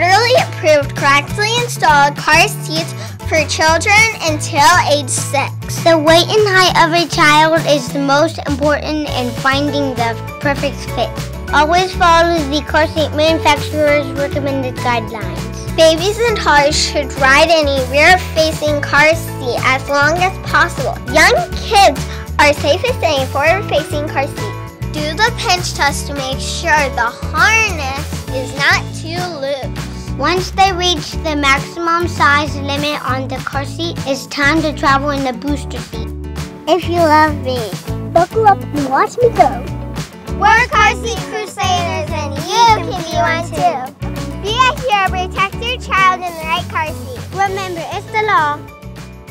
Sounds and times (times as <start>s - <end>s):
Speech: 0.0s - 36.0s, 36.7s - 39.7s, 40.4s - 48.6s
Music: 0.0s - 49.3s.